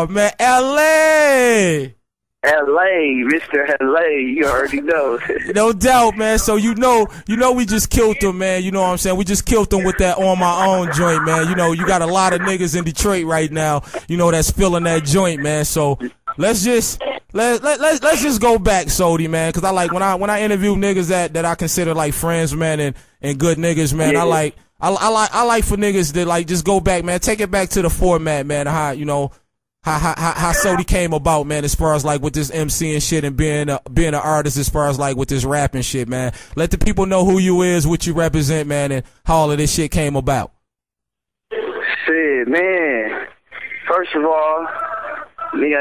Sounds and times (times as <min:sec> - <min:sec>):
Speech: 0:00.0 - 0:29.3, 0:29.9 - 0:40.6, 0:41.6 - 0:45.8.